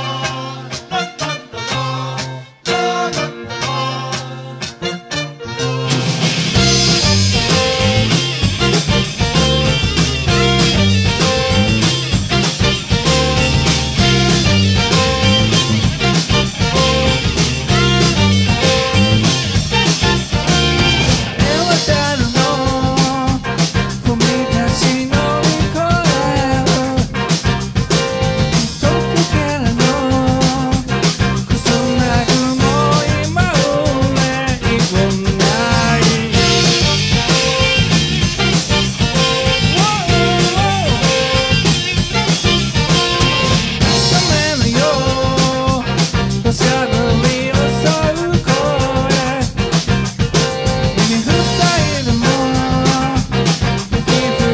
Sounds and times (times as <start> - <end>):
Exciting music: 4.6 - 54.5.